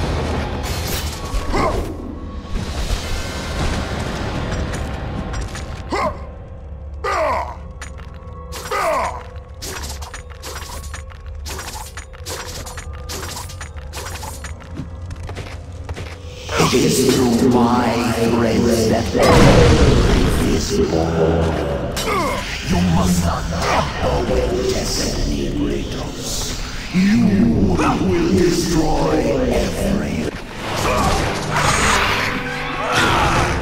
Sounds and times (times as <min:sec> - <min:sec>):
Music: 0:00.0 - 0:33.6
Speech: 0:16.4 - 0:30.3.